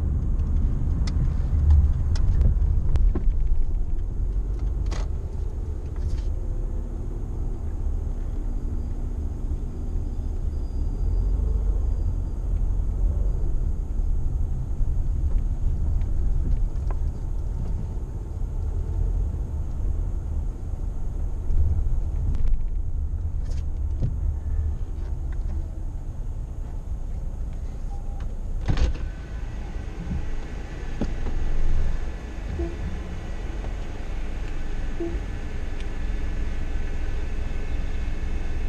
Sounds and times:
Car: 0:00.0 - 0:38.6.

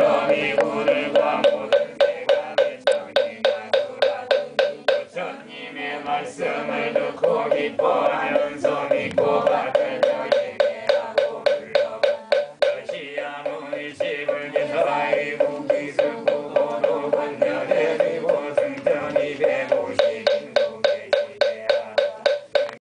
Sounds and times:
Mantra: 0:00.0 - 0:22.8.

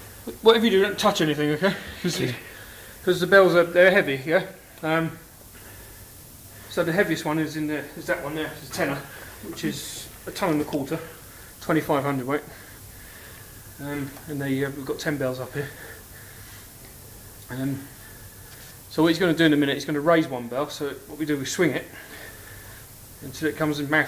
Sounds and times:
Speech: 0:00.3 - 0:05.2, 0:06.7 - 0:12.6, 0:13.8 - 0:16.0, 0:17.5 - 0:18.0, 0:18.9 - 0:22.0, 0:23.2 - 0:24.0.

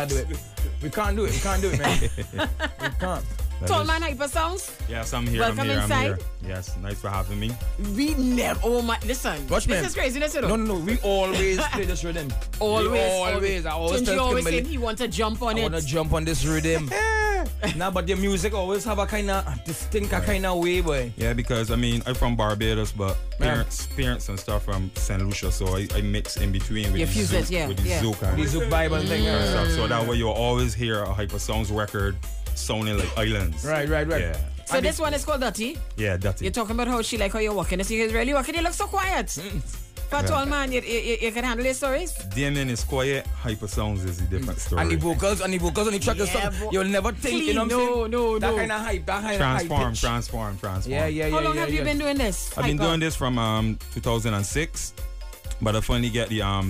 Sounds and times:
Speech: 0:00.0 - 0:02.3, 0:03.0 - 0:54.9, 0:55.6 - 0:56.7
Music: 0:00.0 - 0:56.7.

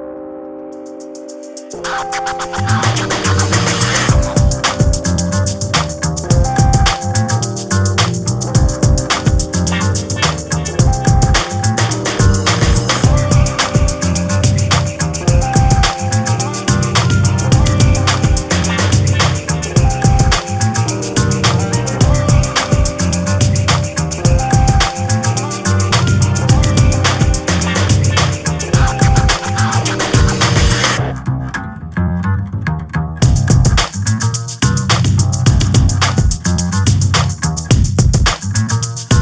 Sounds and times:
Music: 0:00.0 - 0:39.2.

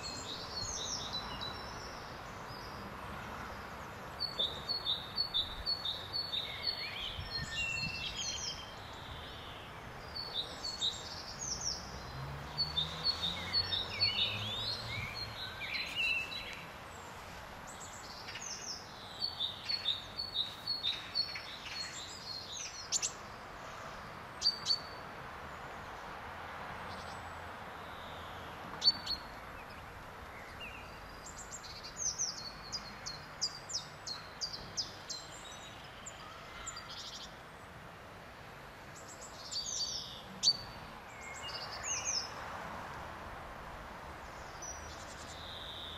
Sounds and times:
Bird vocalization, bird call, bird song: 0:00.0 - 0:26.0, 0:26.8 - 0:37.7, 0:38.9 - 0:42.4, 0:44.2 - 0:45.9.

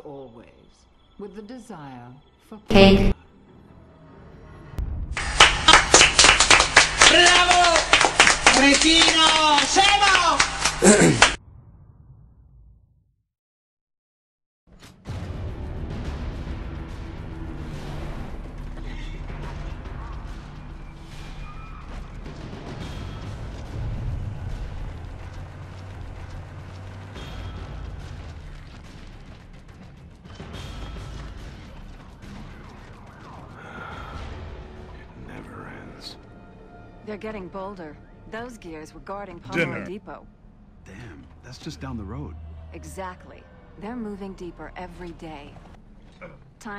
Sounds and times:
Music: 0:00.0 - 0:11.4, 0:14.7 - 0:43.3
Speech: 0:37.1 - 0:40.2, 0:40.9 - 0:45.5.

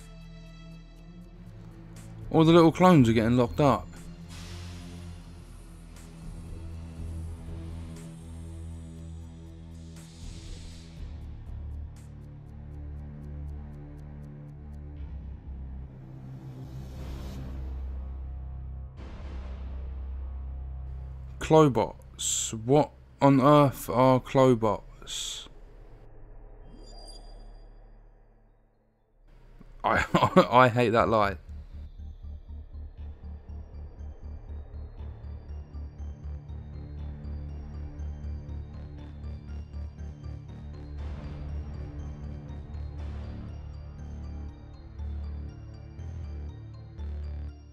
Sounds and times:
Music: 0:00.0 - 0:47.7
Speech: 0:02.3 - 0:04.0, 0:21.4 - 0:25.6, 0:29.8 - 0:31.4.

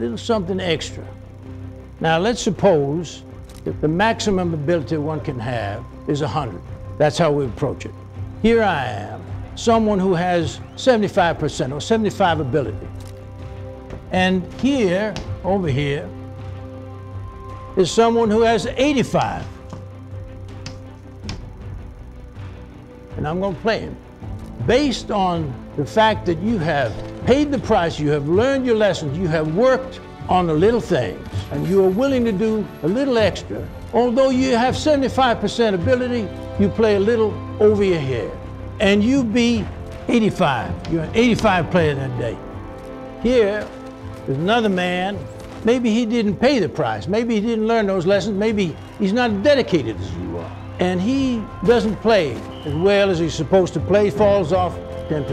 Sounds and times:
Male speech, man speaking: 0:00.0 - 0:01.0, 0:02.0 - 0:12.9, 0:14.1 - 0:16.1, 0:17.8 - 0:19.5, 0:23.2 - 0:24.0, 0:24.7 - 0:42.4, 0:43.2 - 0:43.7, 0:44.3 - 0:55.3
Music: 0:00.0 - 0:55.3.

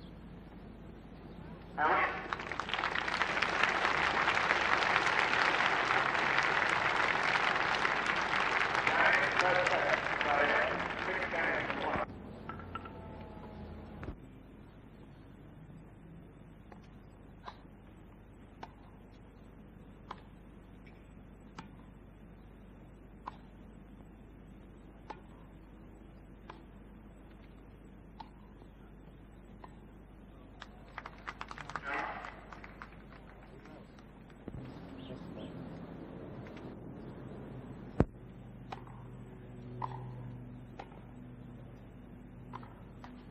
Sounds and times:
Speech: 0:01.5 - 0:02.4, 0:08.8 - 0:12.1, 0:31.7 - 0:32.4.

